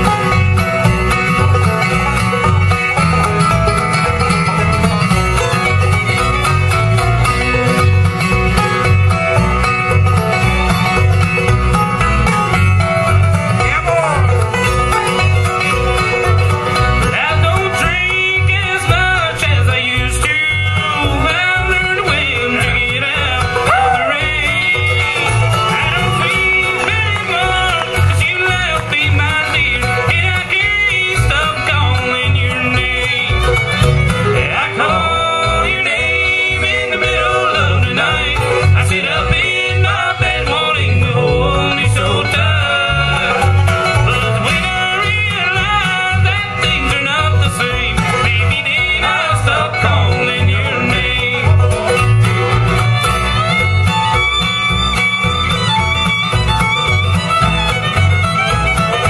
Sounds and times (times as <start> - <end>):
Music: 0.0 - 59.1
Male singing: 13.6 - 14.3, 17.1 - 25.2, 25.8 - 33.5, 34.4 - 43.5, 44.5 - 51.8.